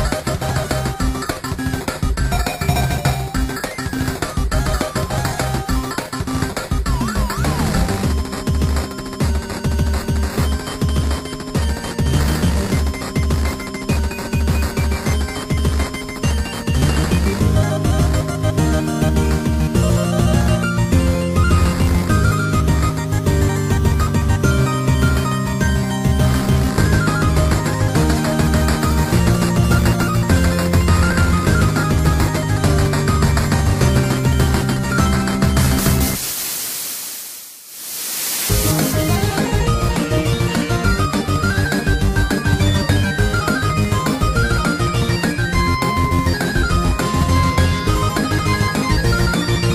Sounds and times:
Video game music: 0.0s - 36.3s, 38.4s - 49.7s.

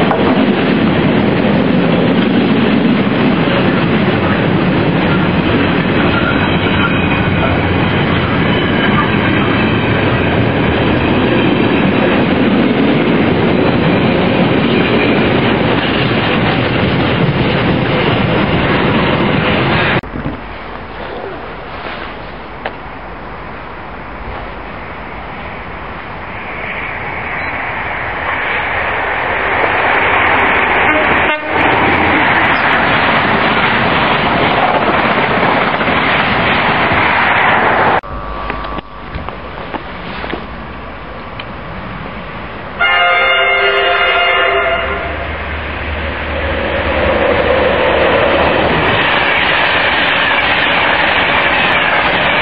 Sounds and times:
Clickety-clack: 0.0s - 9.9s
Railroad car, train wagon: 0.0s - 52.4s
Train: 0.0s - 52.4s.

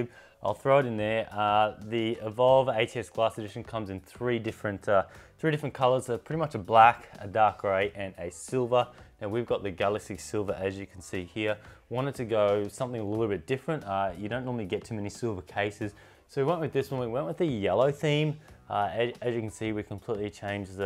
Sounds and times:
Speech: 0.0s - 20.8s.

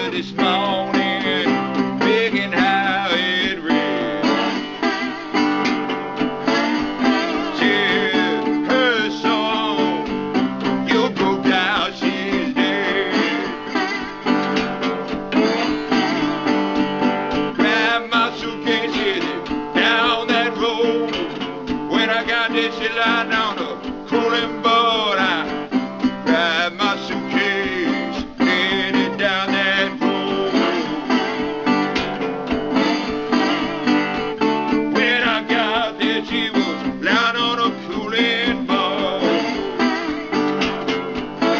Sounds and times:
Guitar: 0.0s - 41.5s.

